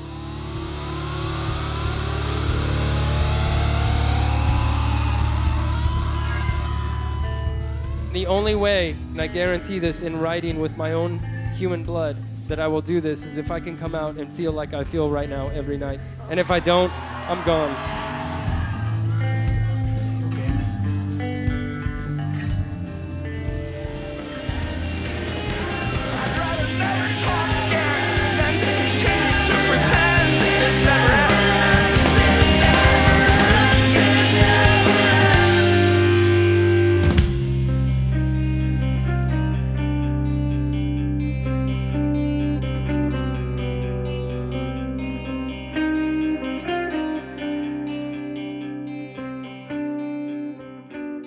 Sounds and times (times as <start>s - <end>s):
Angry music: 0.0s - 12.8s, 15.0s - 40.3s.